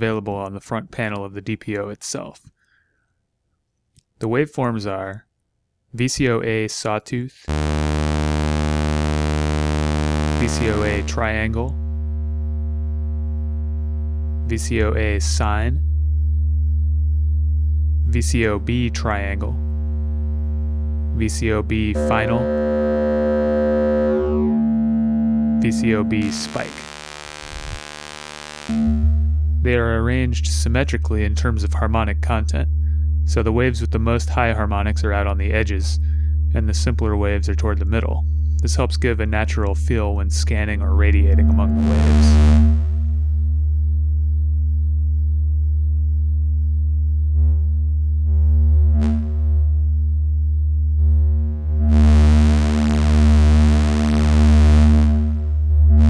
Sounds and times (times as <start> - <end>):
Speech: 0.0 - 2.5, 4.2 - 5.3, 6.0 - 7.5, 10.4 - 11.8, 14.5 - 15.8, 18.1 - 19.6, 21.1 - 22.7, 25.6 - 26.9, 29.6 - 32.7, 33.3 - 42.5.